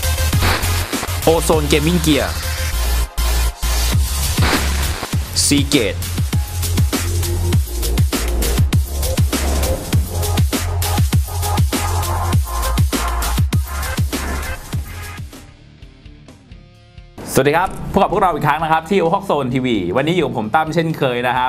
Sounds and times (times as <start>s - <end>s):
Music: 0.0s - 21.4s
Speech: 1.2s - 2.4s, 5.3s - 6.0s, 17.2s - 21.4s.